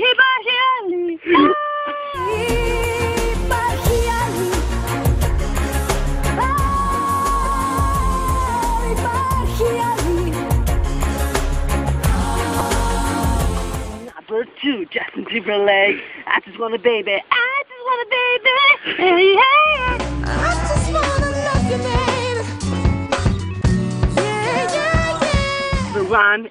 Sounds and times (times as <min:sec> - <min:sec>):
Pop music: 0:02.2 - 0:14.2, 0:19.6 - 0:26.2.